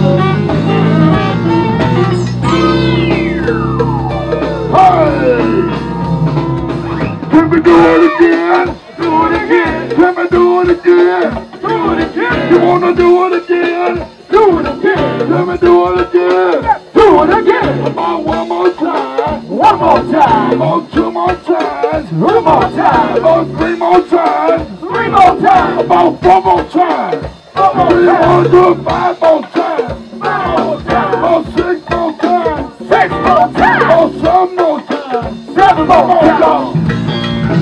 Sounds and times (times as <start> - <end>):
Funk: 0.0 - 37.6.